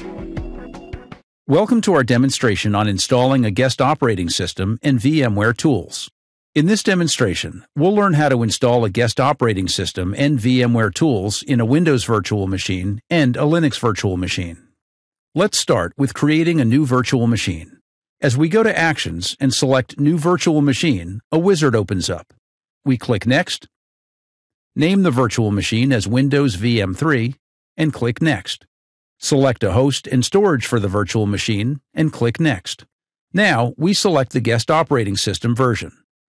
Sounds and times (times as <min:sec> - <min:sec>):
Speech: 0:01.5 - 0:14.7, 0:15.4 - 0:23.8, 0:24.8 - 0:36.0.